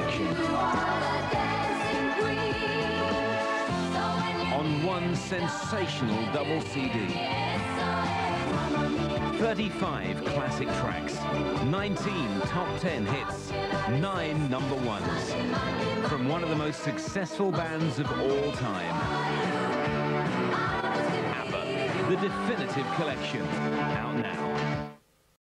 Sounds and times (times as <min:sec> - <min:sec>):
Music: 0:00.0 - 0:25.1
Speech: 0:04.5 - 0:07.2, 0:09.4 - 0:15.3, 0:16.1 - 0:19.0, 0:21.3 - 0:24.4.